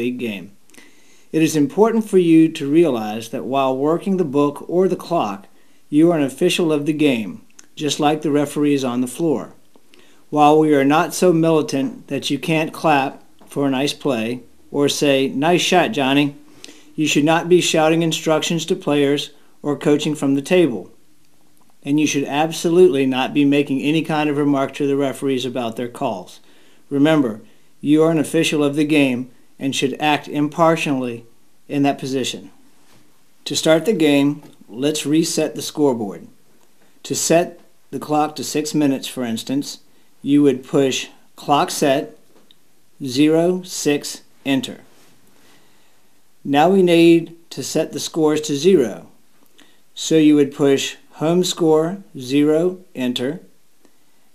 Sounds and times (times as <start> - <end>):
Speech: 0.0 - 0.6, 1.4 - 9.6, 10.3 - 16.4, 17.0 - 21.0, 21.8 - 32.6, 33.4 - 36.4, 37.0 - 42.3, 43.0 - 44.9, 46.4 - 49.2, 50.0 - 53.5.